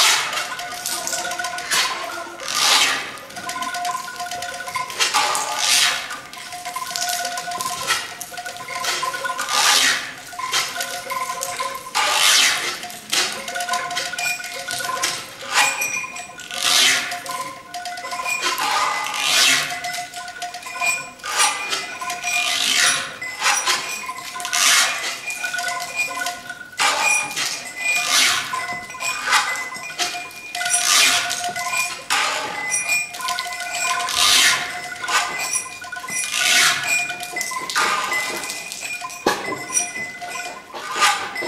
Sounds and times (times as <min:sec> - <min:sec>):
Percussion: 0:00.0 - 0:41.4.